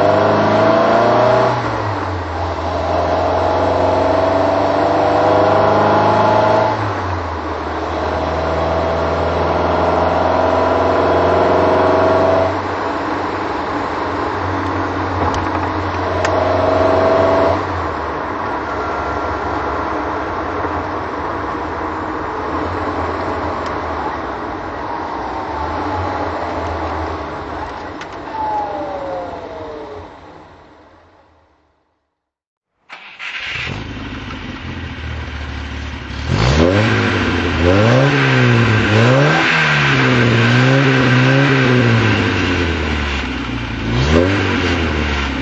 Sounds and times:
Accelerating, revving, vroom: 0:00.0 - 0:07.1, 0:07.9 - 0:12.6, 0:16.1 - 0:17.7, 0:36.1 - 0:45.4
Medium engine (mid frequency): 0:00.0 - 0:32.0, 0:32.7 - 0:45.4
Car: 0:00.0 - 0:32.1, 0:32.7 - 0:45.4.

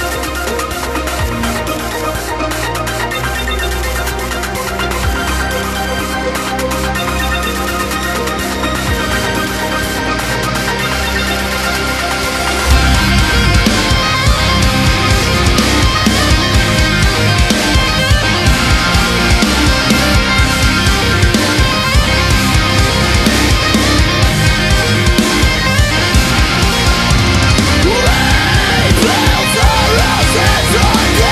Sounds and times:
Music: 0:00.0 - 0:31.3.

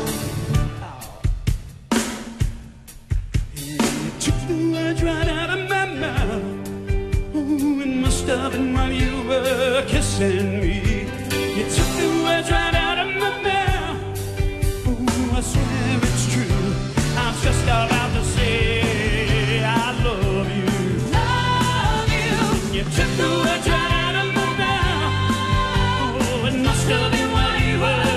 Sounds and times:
Music: 0:00.0 - 0:28.1
Singing: 0:14.9 - 0:28.1.

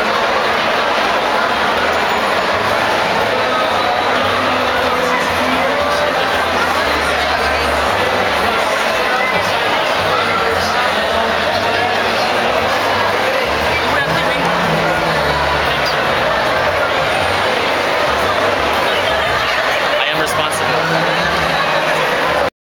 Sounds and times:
Speech: 0:00.0 - 0:22.5
Crowd: 0:00.0 - 0:22.6.

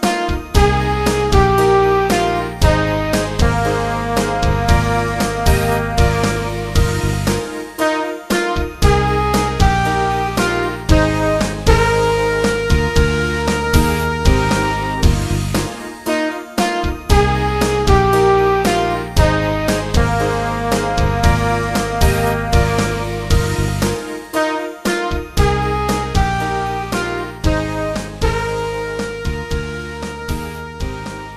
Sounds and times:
Music: 0:00.0 - 0:31.3.

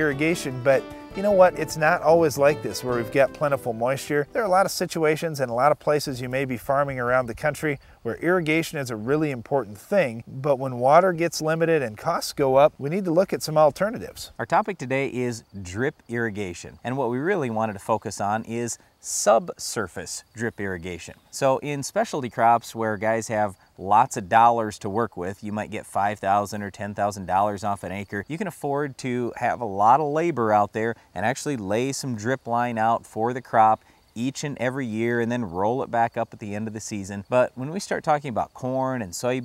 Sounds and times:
Speech: 0:00.0 - 0:39.4.

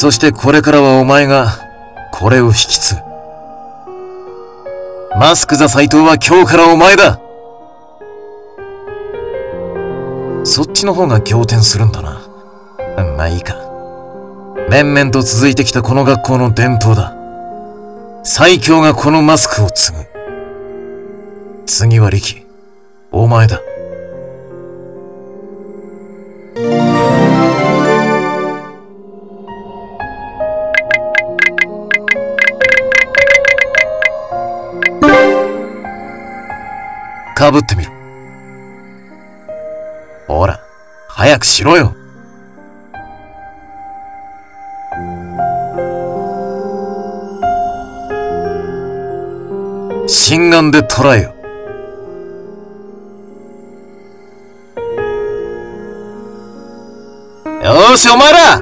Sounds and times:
Speech: 0:00.0 - 0:01.6, 0:05.2 - 0:07.2, 0:10.5 - 0:12.3, 0:14.7 - 0:17.2, 0:18.3 - 0:20.1, 0:23.2 - 0:23.7, 0:37.4 - 0:37.9, 0:50.1 - 0:51.3, 0:57.6 - 0:58.6
Music: 0:00.0 - 0:58.6.

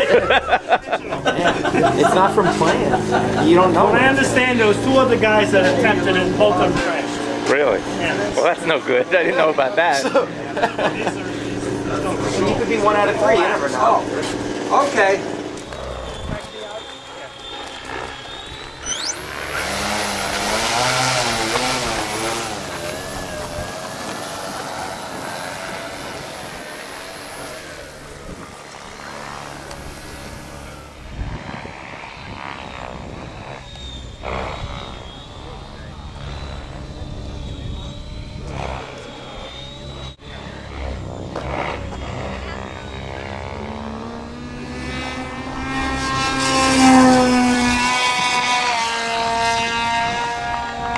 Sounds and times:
Vehicle: 0:00.0 - 0:50.9.

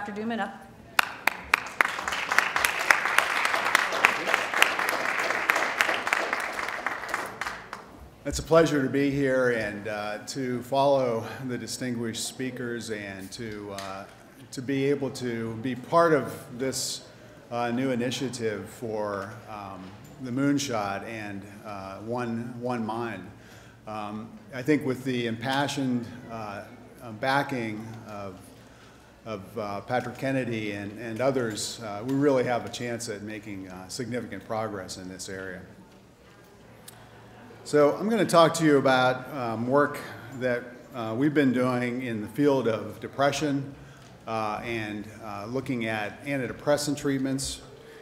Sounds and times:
Speech: 0:23.9 - 0:28.4, 0:29.3 - 0:35.8, 0:37.6 - 0:43.7, 0:44.3 - 0:47.7.

